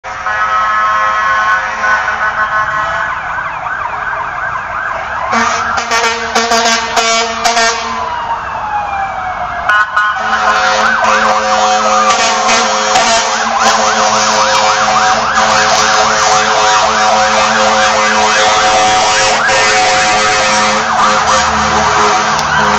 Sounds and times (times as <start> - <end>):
Emergency vehicle: 0.0 - 22.7
Outside, urban or manmade: 0.0 - 22.7
Air horn, truck horn: 0.1 - 3.1, 5.3 - 8.0, 10.2 - 22.7.